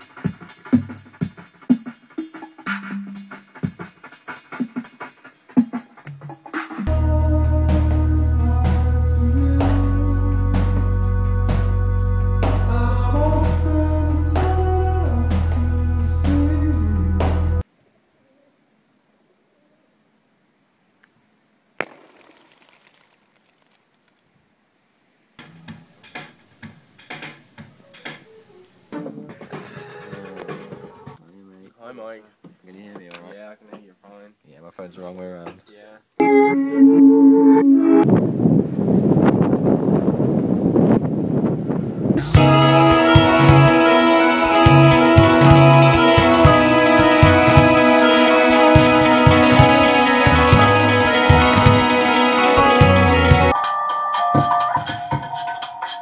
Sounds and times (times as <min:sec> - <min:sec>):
Music: 0:00.0 - 0:17.6, 0:25.4 - 0:31.2, 0:36.2 - 0:38.1, 0:42.2 - 0:56.0.